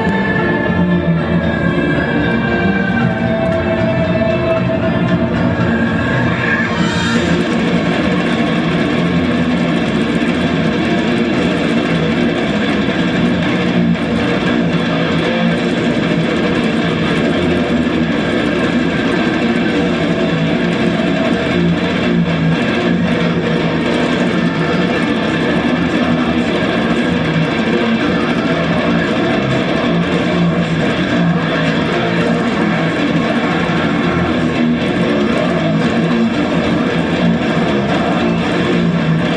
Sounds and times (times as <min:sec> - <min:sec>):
Guitar: 0:00.0 - 0:39.3.